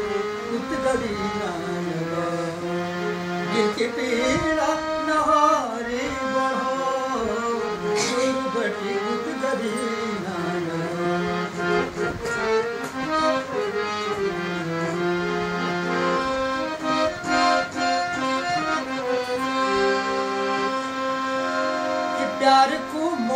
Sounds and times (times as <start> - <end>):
Accordion: 0.0 - 23.3.